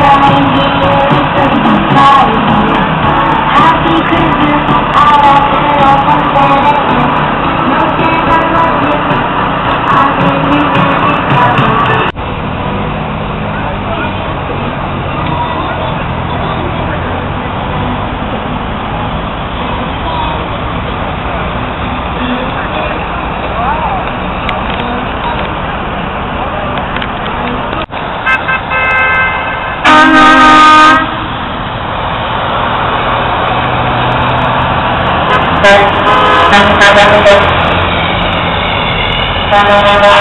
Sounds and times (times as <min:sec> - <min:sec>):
Music: 0:00.0 - 0:12.2
Vehicle: 0:00.0 - 0:40.2.